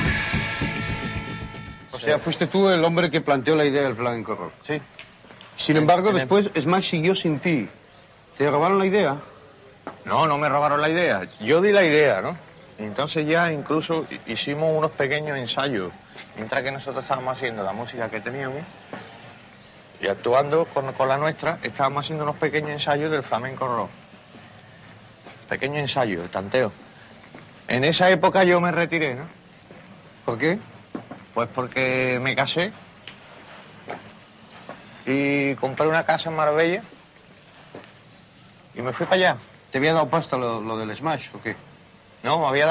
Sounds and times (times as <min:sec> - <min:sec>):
Speech: 0:01.9 - 0:04.9, 0:05.6 - 0:07.8, 0:08.4 - 0:09.3, 0:10.0 - 0:18.7, 0:20.0 - 0:24.0, 0:25.5 - 0:26.8, 0:27.7 - 0:29.4, 0:30.2 - 0:30.7, 0:31.4 - 0:32.8, 0:35.0 - 0:36.9, 0:38.8 - 0:41.6, 0:42.2 - 0:42.7.